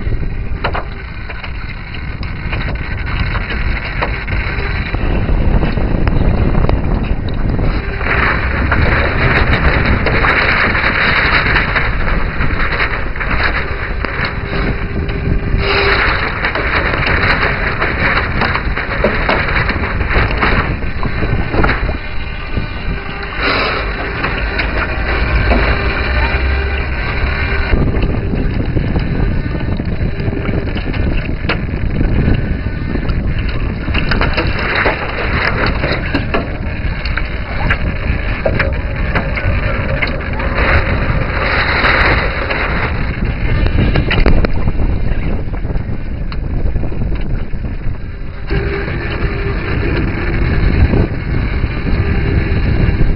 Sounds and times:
Rowboat, canoe, kayak: 0.0 - 53.1.

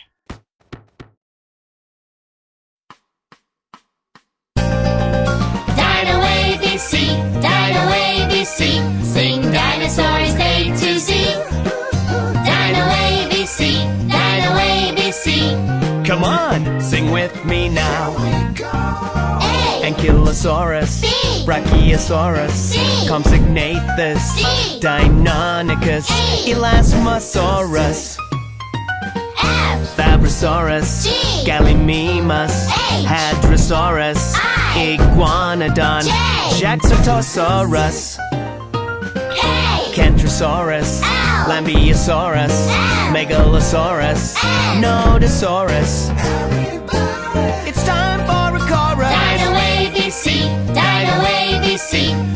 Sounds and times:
Music for children: 4.6 - 52.3
Speech: 16.1 - 28.2, 29.5 - 34.1, 34.8 - 38.2, 47.7 - 49.0.

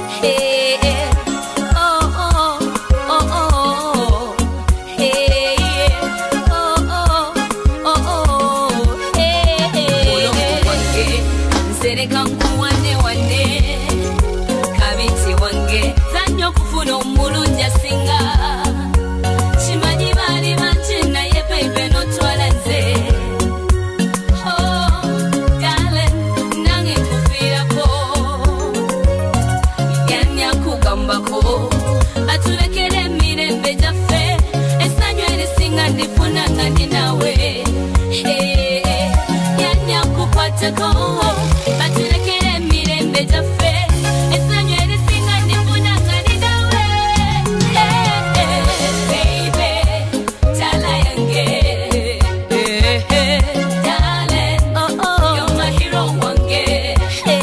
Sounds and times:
Background music: 0.0 - 57.4
Dance music: 0.0 - 57.4
Electronic music: 0.0 - 57.4
Funk: 0.0 - 57.4.

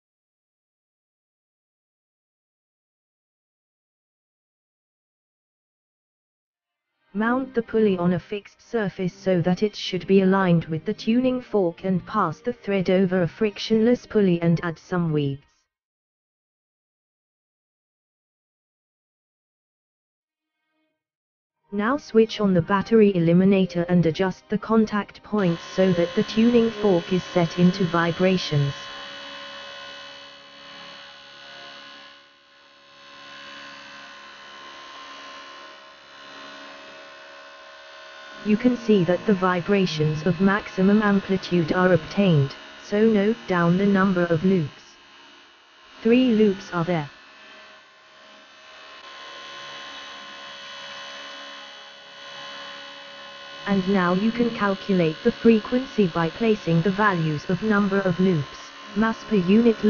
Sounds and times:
Music: 6.8 - 15.7, 21.7 - 32.0, 38.4 - 45.0, 46.0 - 47.1, 53.6 - 59.8
Speech: 7.2 - 15.5, 21.8 - 28.9, 38.4 - 44.9, 46.0 - 47.1, 53.7 - 59.8.

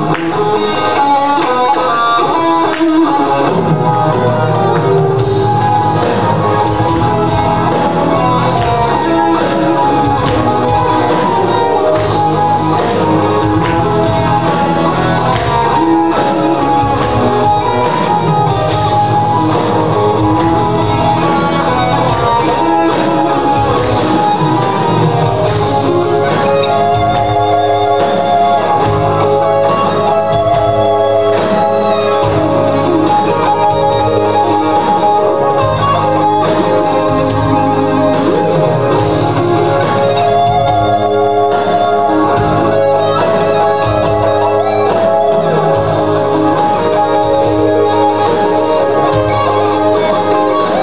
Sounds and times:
Bass guitar: 0.0 - 50.8.

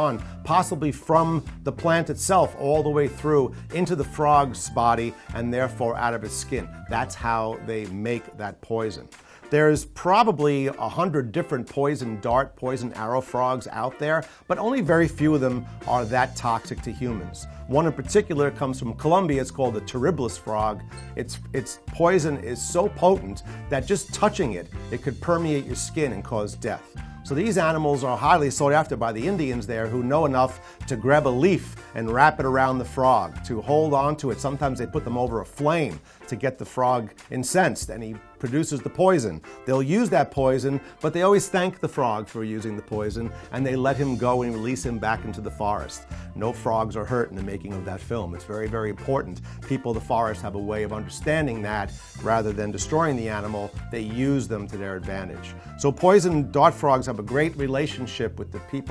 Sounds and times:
Music: 0.0 - 58.9
Speech: 0.0 - 58.9.

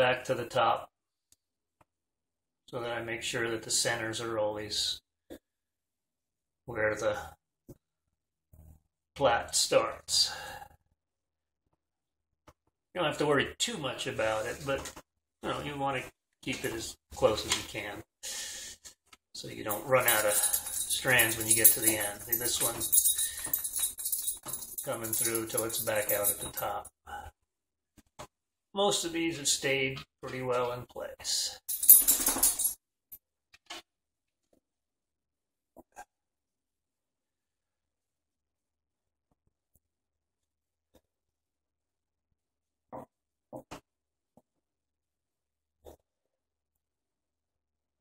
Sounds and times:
Speech: 0.0 - 0.9, 2.7 - 5.0, 6.7 - 7.4, 9.2 - 10.5, 13.0 - 18.1, 19.4 - 22.9, 24.9 - 27.3, 28.8 - 31.6.

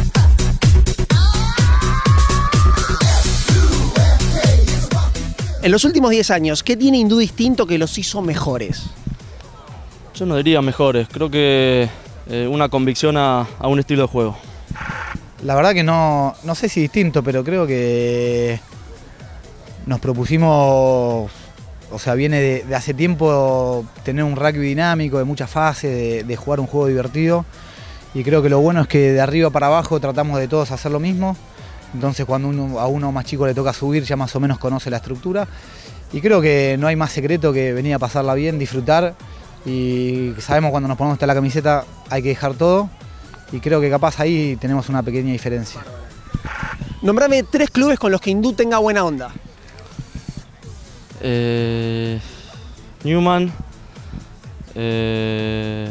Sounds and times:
Music: 0.0 - 55.9.

